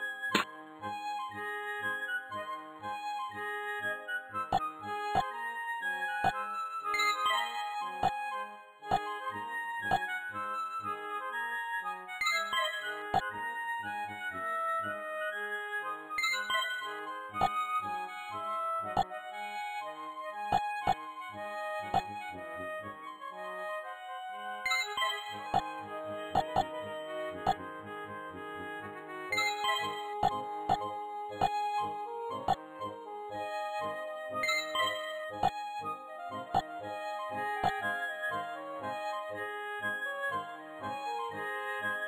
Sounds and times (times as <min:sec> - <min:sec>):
Music: 0:00.0 - 0:42.0.